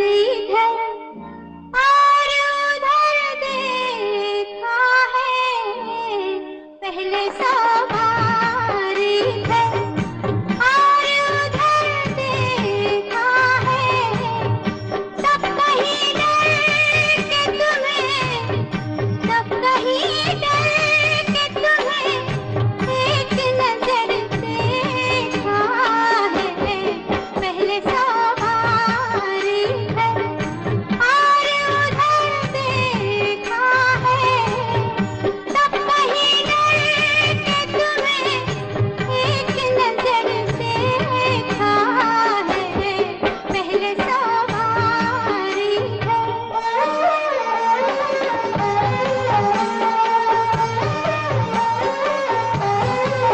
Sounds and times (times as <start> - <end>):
Music of Bollywood: 0.0 - 53.3.